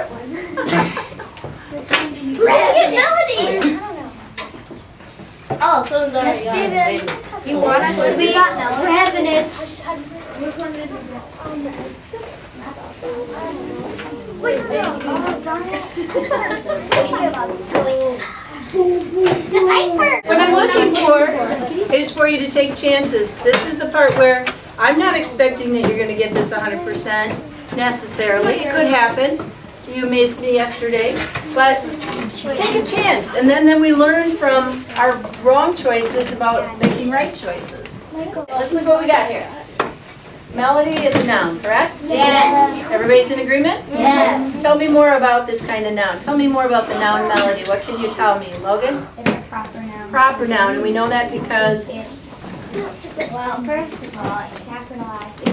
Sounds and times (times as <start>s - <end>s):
Female speech, woman speaking: 6.2s - 11.6s, 20.2s - 39.6s, 40.5s - 49.2s, 50.1s - 52.2s.